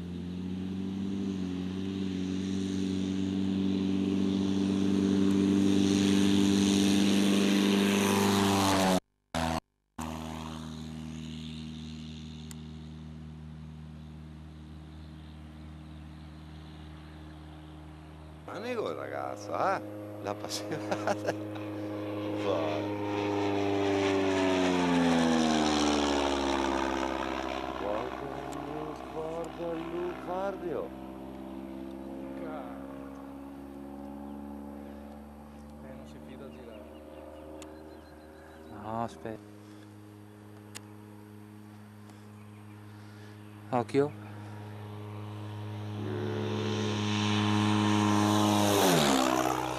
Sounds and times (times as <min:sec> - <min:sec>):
Aircraft: 0:00.0 - 0:49.7.